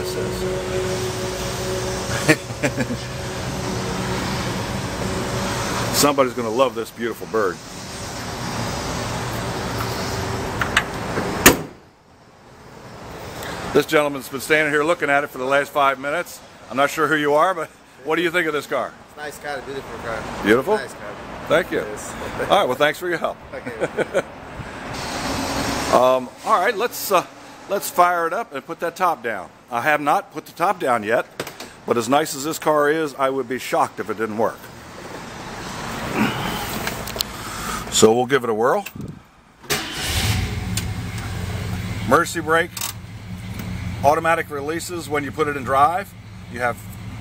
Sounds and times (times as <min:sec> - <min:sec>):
Car: 0:00.0 - 0:15.4, 0:18.8 - 0:29.7, 0:38.8 - 0:47.2
Speech: 0:06.0 - 0:07.6, 0:13.7 - 0:23.9, 0:25.9 - 0:31.3, 0:31.9 - 0:34.7, 0:37.9 - 0:38.9, 0:42.0 - 0:42.8, 0:44.0 - 0:46.9.